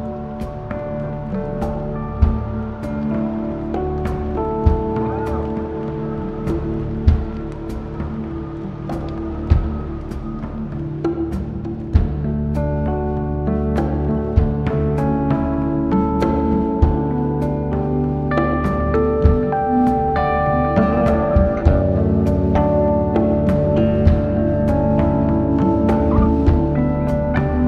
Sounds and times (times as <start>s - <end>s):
Music: 0.0s - 27.6s.